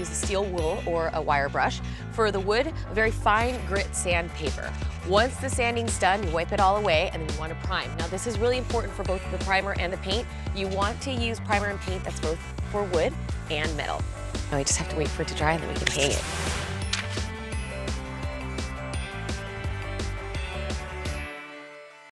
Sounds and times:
Speech: 0.0s - 16.2s
Music: 0.0s - 22.1s.

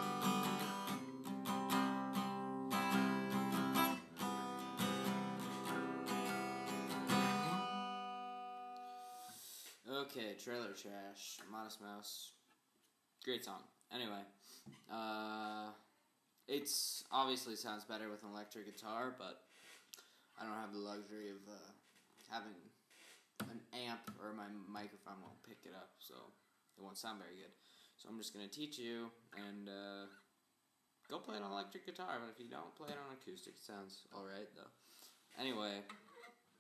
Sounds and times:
Music: 0.0s - 9.4s
Speech: 9.8s - 12.4s, 13.2s - 15.9s, 16.5s - 19.4s, 20.4s - 22.8s, 23.4s - 30.2s, 31.1s - 34.8s, 35.4s - 36.0s.

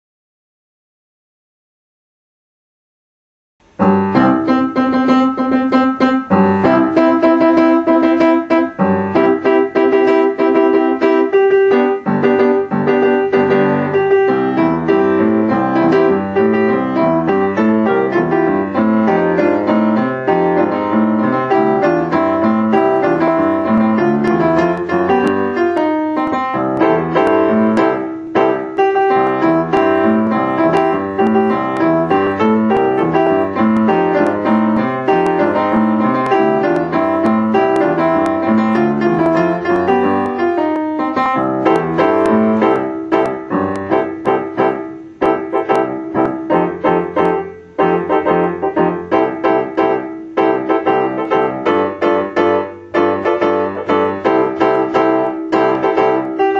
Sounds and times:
Music: 3.6s - 56.5s.

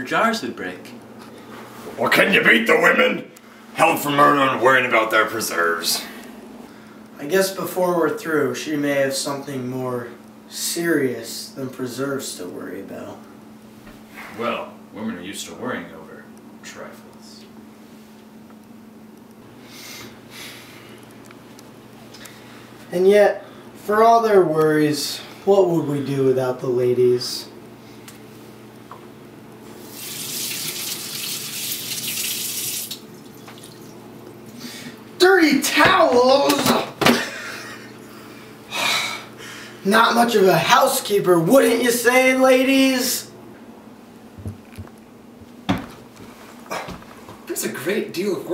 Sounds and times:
Sink (filling or washing): 29.8s - 34.0s
Water tap, faucet: 29.8s - 34.0s.

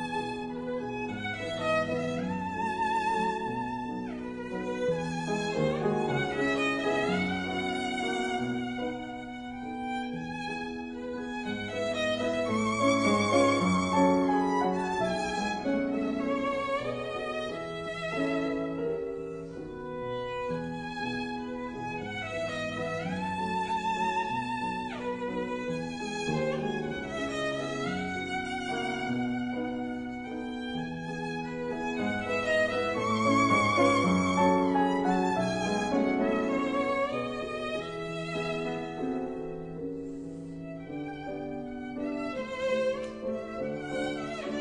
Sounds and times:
Violin, fiddle: 0.0s - 44.6s.

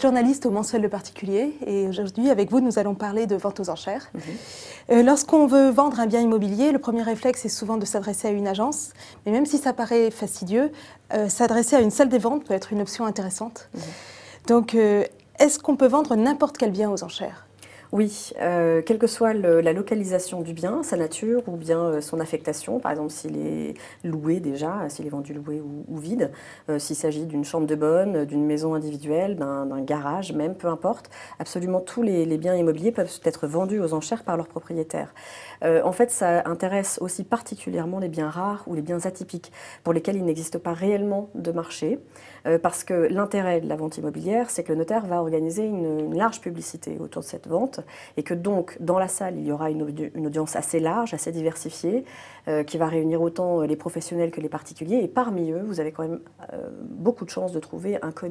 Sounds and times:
Speech: 0.0s - 13.7s, 14.5s - 17.4s, 18.0s - 58.3s.

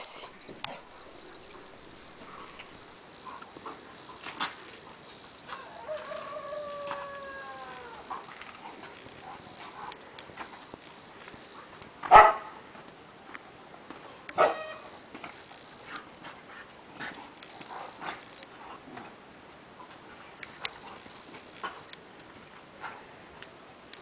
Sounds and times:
Bow-wow: 12.1s - 12.5s, 14.4s - 14.9s.

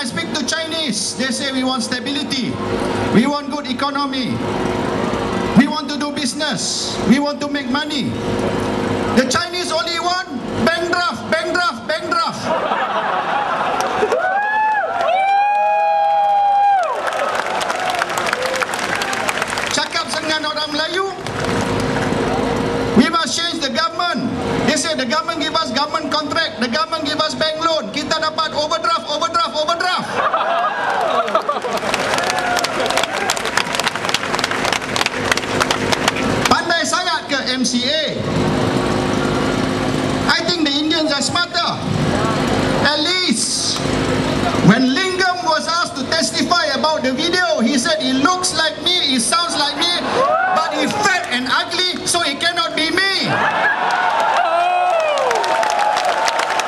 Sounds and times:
Male speech, man speaking: 0.0s - 2.6s, 3.2s - 4.4s, 5.6s - 8.2s, 9.2s - 12.5s, 19.7s - 21.2s, 23.0s - 30.1s, 36.5s - 38.2s, 40.3s - 41.8s, 42.8s - 43.8s, 44.6s - 50.0s, 50.6s - 53.4s
Narration, monologue: 0.0s - 12.6s, 19.6s - 22.0s, 22.6s - 30.2s, 36.2s - 53.4s.

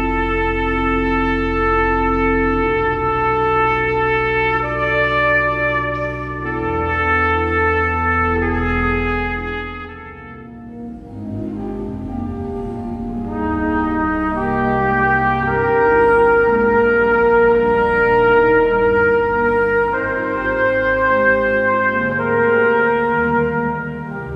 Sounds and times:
Trumpet: 0.0s - 24.3s.

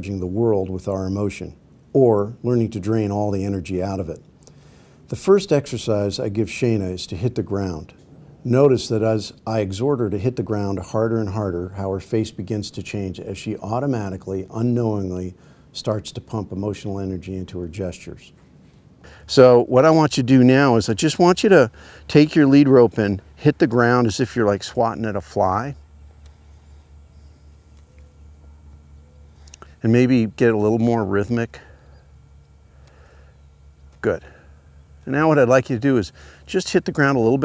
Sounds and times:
Speech: 0.0s - 4.2s, 5.1s - 18.3s, 19.3s - 25.8s, 29.8s - 31.7s, 34.0s - 34.4s, 35.0s - 37.4s.

